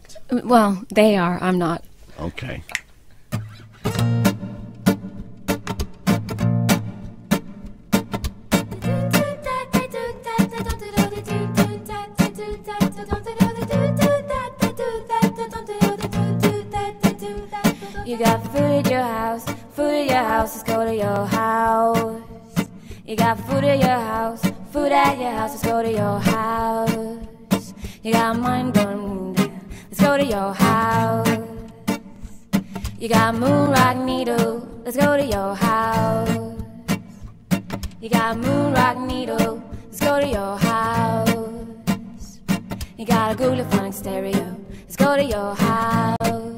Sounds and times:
Music: 0:03.3 - 0:46.5.

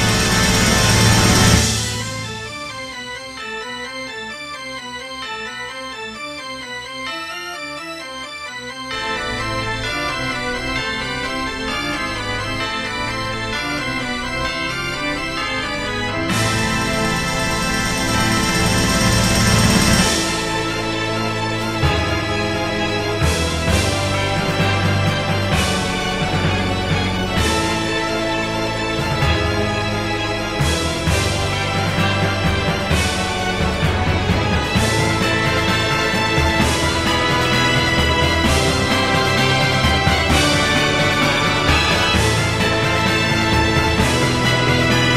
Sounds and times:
Scary music: 0:00.0 - 0:45.1.

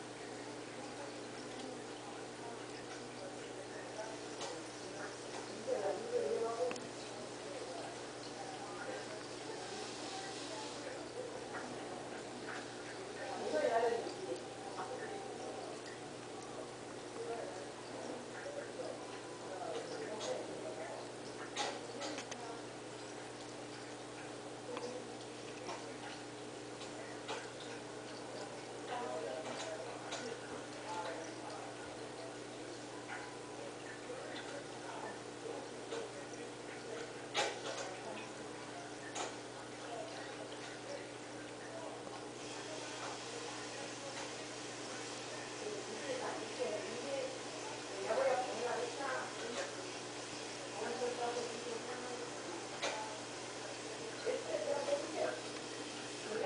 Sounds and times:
Speech: 0:00.0 - 0:56.4.

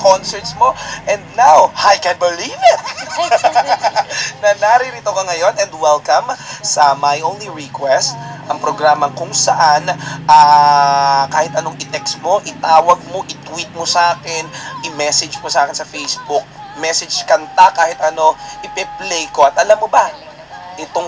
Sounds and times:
Radio: 0:00.0 - 0:06.9, 0:07.6 - 0:21.0
Speech: 0:00.0 - 0:21.0
Music: 0:11.0 - 0:21.0.

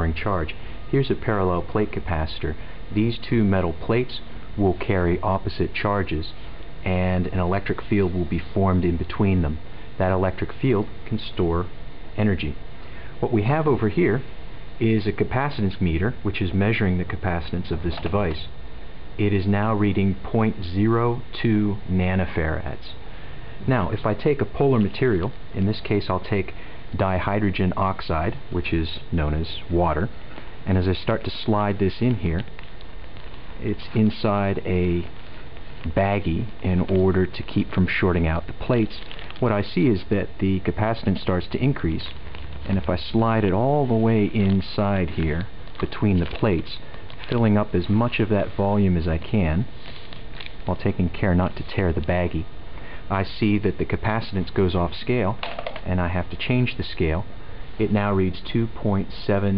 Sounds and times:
Speech: 0:00.0 - 0:12.6, 0:13.2 - 0:18.6, 0:19.2 - 0:23.0, 0:23.6 - 0:32.5, 0:33.6 - 0:35.1, 0:35.8 - 0:49.7, 0:50.6 - 0:52.5, 0:53.1 - 0:59.5.

